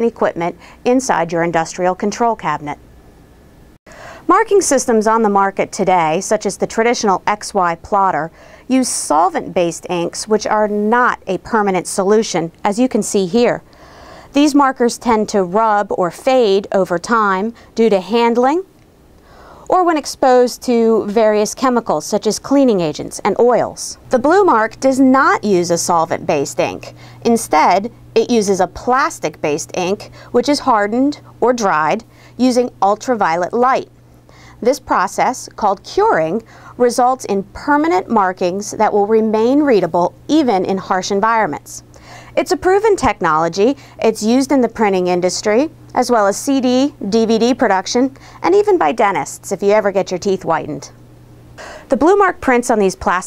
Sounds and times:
Speech: 0:00.0 - 0:02.8, 0:04.3 - 0:13.6, 0:14.3 - 0:18.7, 0:19.7 - 0:33.9, 0:34.6 - 0:51.0, 0:51.9 - 0:53.2.

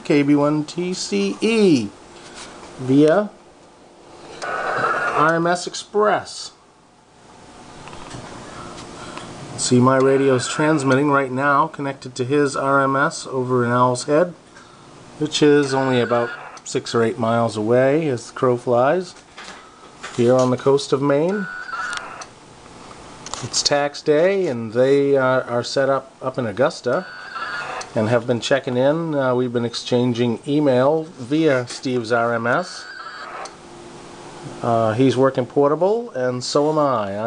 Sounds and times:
Speech: 0:00.0 - 0:02.0, 0:02.8 - 0:03.4, 0:05.2 - 0:06.6, 0:09.6 - 0:14.4, 0:15.2 - 0:19.2, 0:20.2 - 0:21.5, 0:23.4 - 0:27.1, 0:28.0 - 0:32.9, 0:34.5 - 0:37.2.

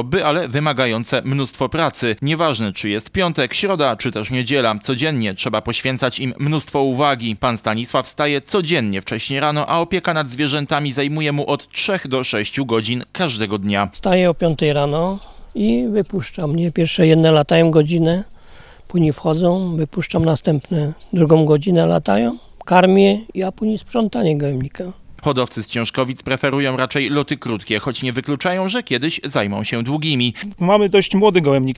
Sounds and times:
Speech: 0:00.0 - 0:18.3, 0:18.9 - 0:31.7.

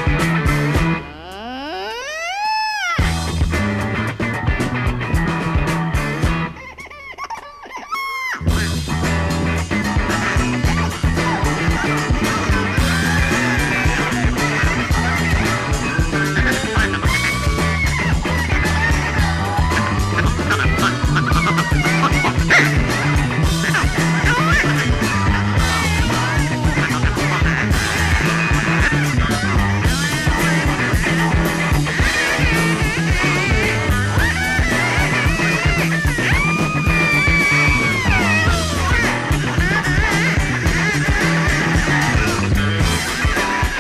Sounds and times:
Music: 0:00.0 - 0:07.4, 0:08.2 - 0:43.8.

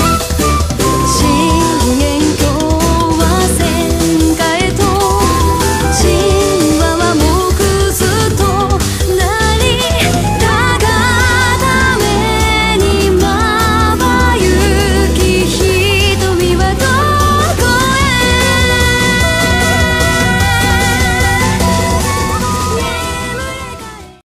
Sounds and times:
Pop music: 0:00.0 - 0:24.2.

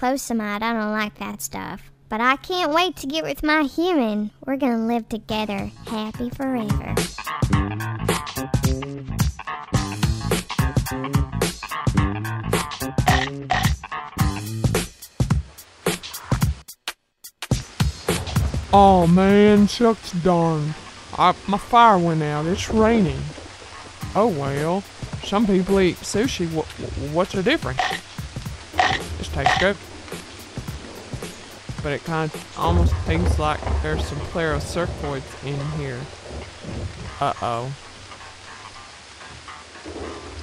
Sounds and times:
Drum machine: 0:12.6 - 0:19.2.

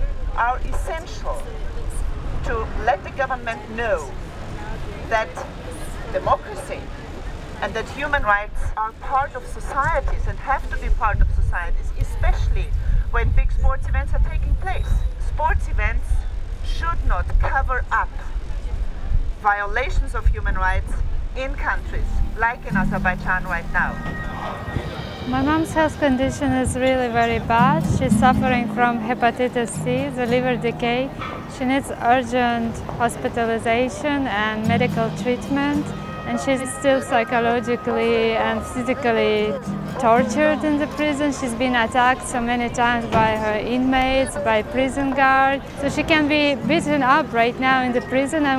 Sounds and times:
Speech: 0:00.0 - 0:04.2, 0:07.6 - 0:18.4, 0:19.4 - 0:24.2, 0:25.3 - 0:48.5.

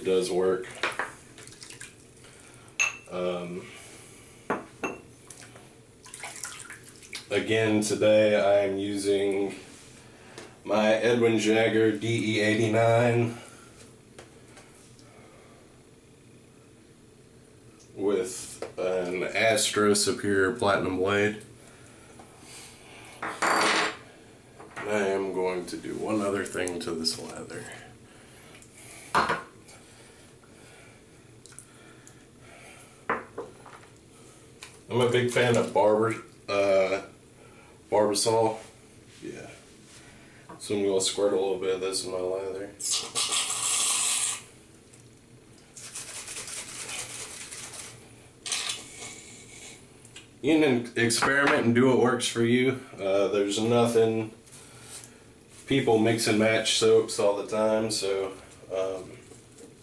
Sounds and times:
Speech: 0:00.0 - 0:00.7, 0:03.1 - 0:03.7, 0:07.3 - 0:09.6, 0:10.7 - 0:13.4, 0:18.0 - 0:21.5, 0:24.8 - 0:27.9, 0:34.9 - 0:37.1, 0:37.9 - 0:39.6, 0:40.6 - 0:43.0, 0:50.4 - 0:54.4, 0:55.7 - 0:59.2.

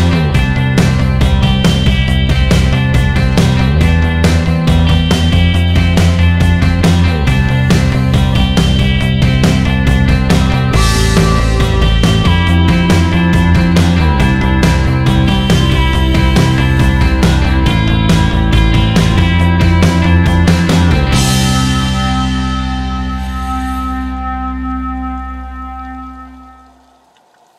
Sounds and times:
Music: 0:00.0 - 0:27.2.

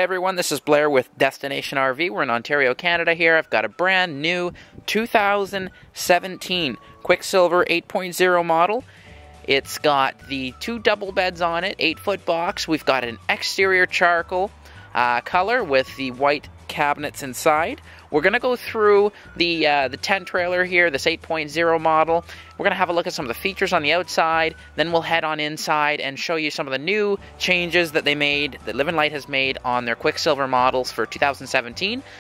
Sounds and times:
Speech: 0:00.0 - 0:08.8, 0:09.5 - 0:32.1.

